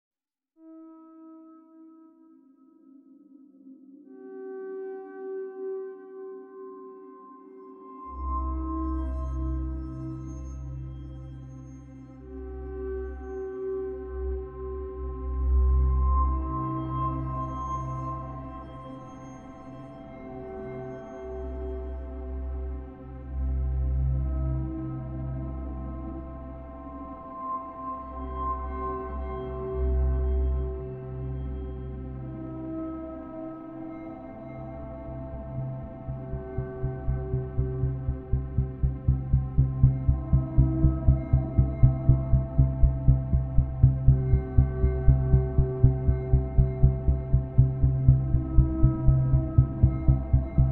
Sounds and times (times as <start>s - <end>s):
Music: 0.6s - 50.7s.